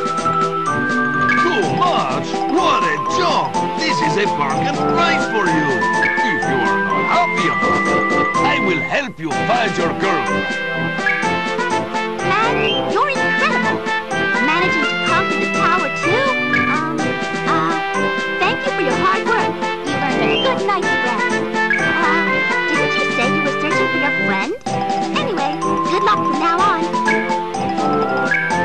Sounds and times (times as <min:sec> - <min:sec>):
Music: 0:00.0 - 0:28.6
Speech: 0:01.4 - 0:07.6, 0:08.4 - 0:10.3, 0:12.3 - 0:13.8, 0:14.4 - 0:17.8, 0:18.4 - 0:21.4, 0:22.0 - 0:24.6, 0:25.2 - 0:26.9.